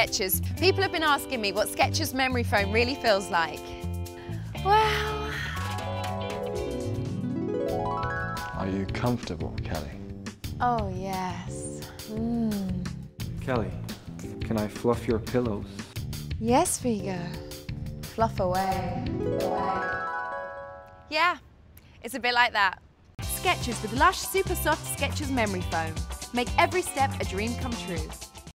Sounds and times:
Music: 0.0 - 21.2, 23.2 - 28.5.

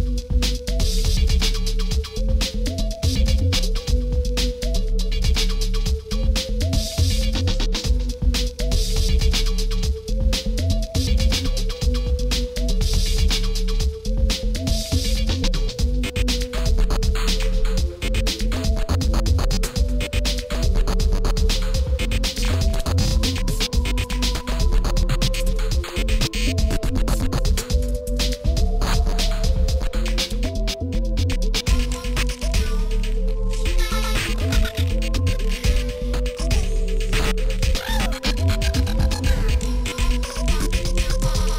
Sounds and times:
Music: 0.0 - 41.5.

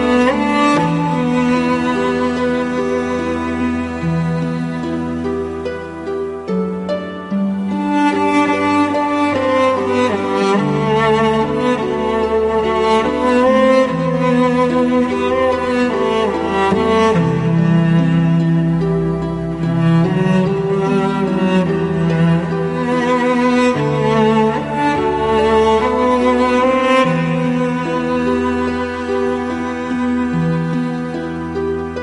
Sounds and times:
Music: 0.0 - 32.0.

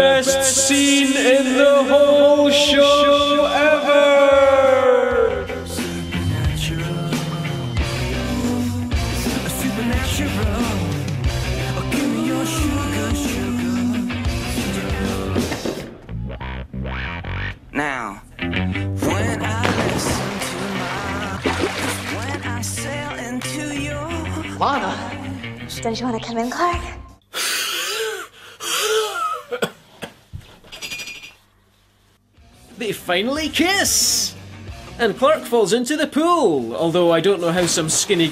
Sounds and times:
Music: 0.0 - 27.2, 32.3 - 38.3
Speech: 17.8 - 18.2, 32.8 - 34.4, 35.0 - 38.3.

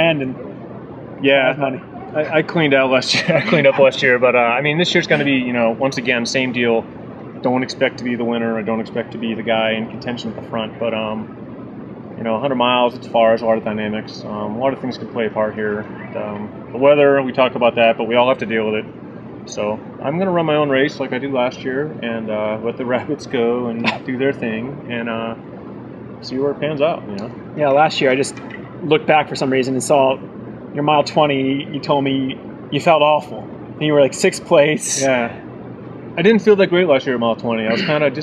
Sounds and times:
Speech: 0.0 - 0.4, 1.2 - 6.8, 7.4 - 11.3, 12.2 - 18.9, 19.5 - 25.4, 26.2 - 30.2, 30.8 - 35.4, 36.2 - 38.2
Outside, urban or manmade: 0.0 - 38.2.

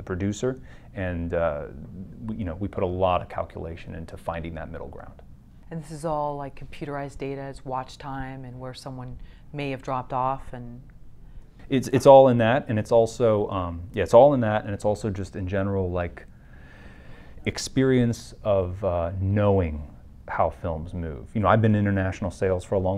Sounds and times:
Speech: 0.0 - 10.8, 11.7 - 16.3, 17.5 - 22.9
Inside, small room: 0.0 - 22.9.

